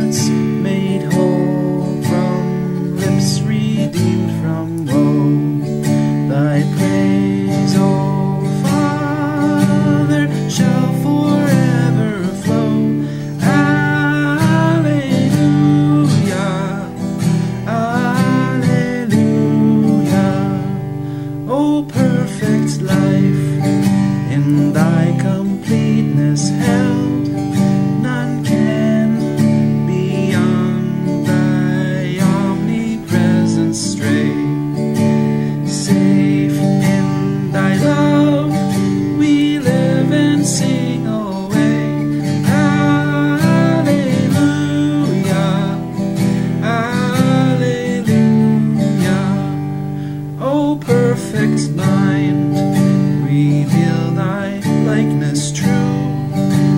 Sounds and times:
Strum: 0:00.0 - 0:56.7.

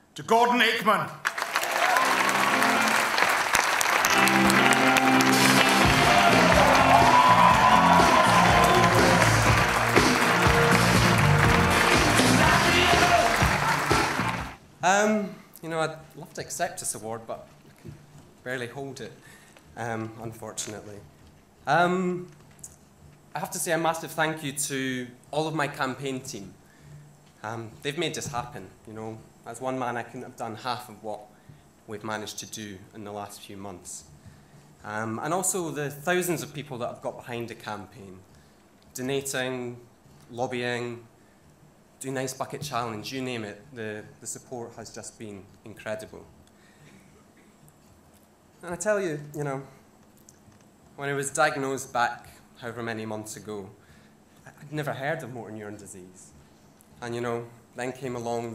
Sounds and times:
Narration, monologue: 0:00.0 - 0:01.3, 0:14.6 - 0:58.5
Male speech, man speaking: 0:00.2 - 0:01.2, 0:14.8 - 0:17.5, 0:18.4 - 0:19.2, 0:19.8 - 0:21.1, 0:21.7 - 0:22.3, 0:23.4 - 0:26.6, 0:27.4 - 0:31.3, 0:31.9 - 0:34.1, 0:34.8 - 0:38.2, 0:39.0 - 0:41.1, 0:42.0 - 0:46.3, 0:48.6 - 0:49.8, 0:51.0 - 0:53.8, 0:54.5 - 0:56.3, 0:57.0 - 0:58.5.

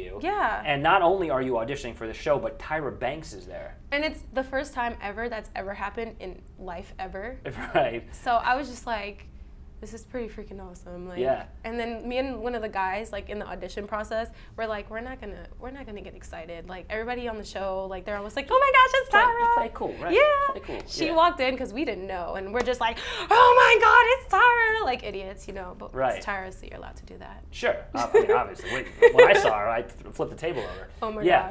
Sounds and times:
Speech: 0:11.2 - 0:11.5, 0:29.2 - 0:31.5.

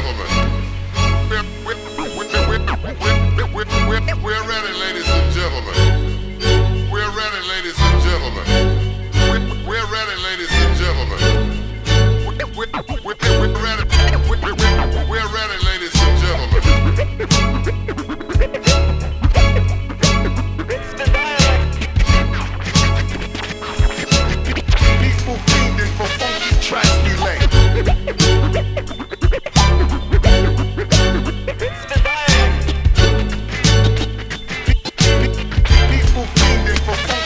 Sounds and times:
Music: 0:00.0 - 0:37.2.

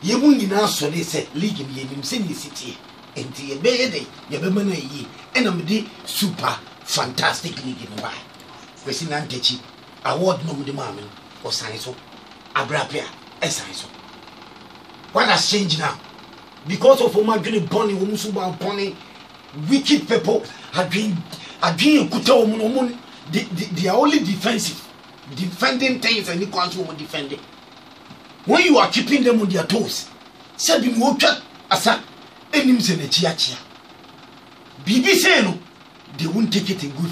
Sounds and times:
Speech: 0:00.0 - 0:14.0, 0:15.1 - 0:16.0, 0:16.6 - 0:27.4, 0:28.4 - 0:33.7, 0:34.8 - 0:37.1.

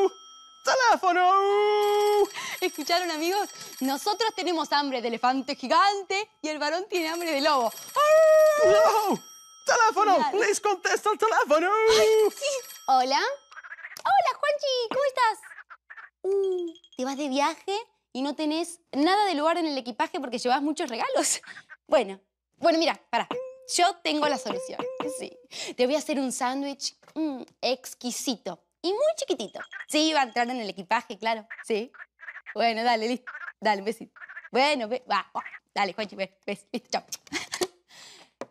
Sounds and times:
Speech: 0:21.9 - 0:31.9.

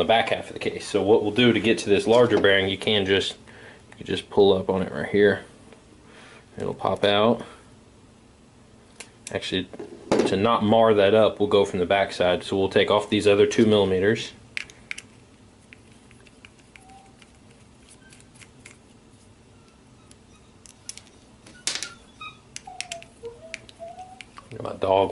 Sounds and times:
Speech: 0:00.0 - 0:03.4, 0:04.0 - 0:05.5, 0:06.6 - 0:07.5, 0:09.3 - 0:14.4, 0:24.5 - 0:25.1.

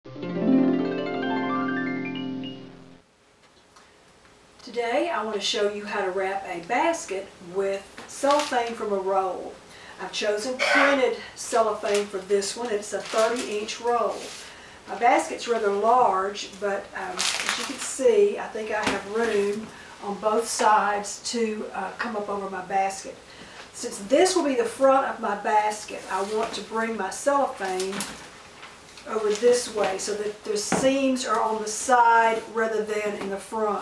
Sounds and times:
Music: 0:00.0 - 0:03.0
Speech: 0:04.6 - 0:23.2, 0:23.8 - 0:28.1, 0:29.0 - 0:33.8.

